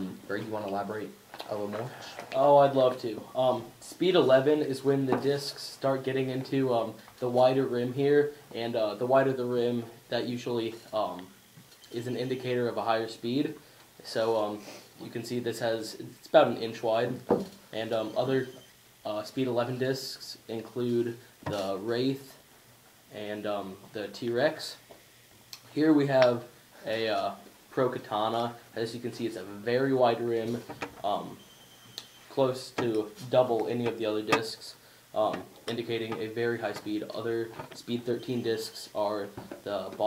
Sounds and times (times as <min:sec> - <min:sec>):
Speech: 0:00.0 - 0:22.4, 0:23.1 - 0:24.8, 0:25.7 - 0:31.4, 0:32.3 - 0:40.0
Inside, small room: 0:00.0 - 0:40.0.